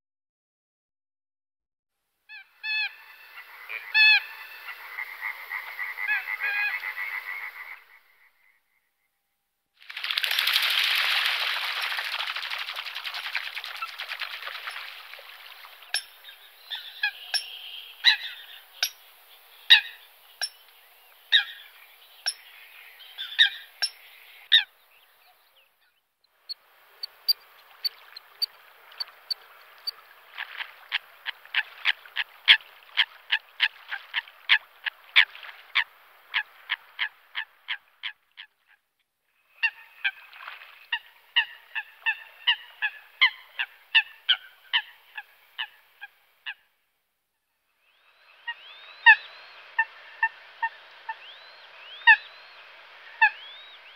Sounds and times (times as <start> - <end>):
Bird: 12.0 - 34.6, 47.9 - 53.9.